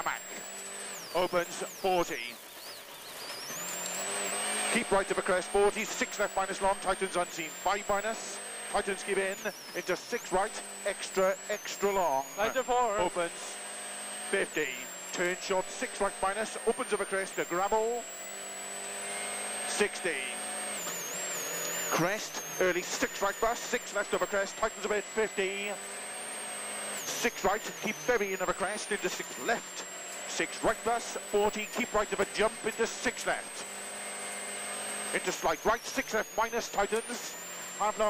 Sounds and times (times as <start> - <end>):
Speech: 0.0 - 0.4, 1.2 - 2.4, 4.7 - 13.6, 14.3 - 18.0, 19.7 - 20.4, 21.9 - 25.8, 27.1 - 33.7, 35.1 - 38.1
Race car, auto racing: 0.0 - 38.1.